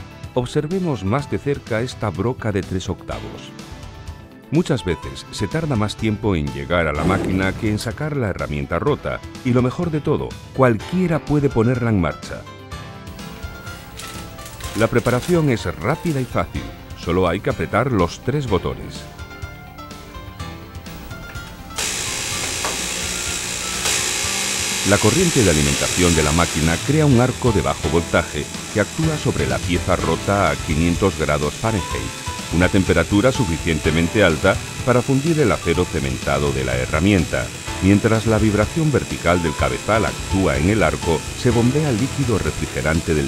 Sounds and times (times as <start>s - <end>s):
Music: 0.0s - 43.2s
Speech: 0.3s - 3.6s, 4.5s - 12.5s, 14.8s - 19.1s, 24.9s - 43.2s.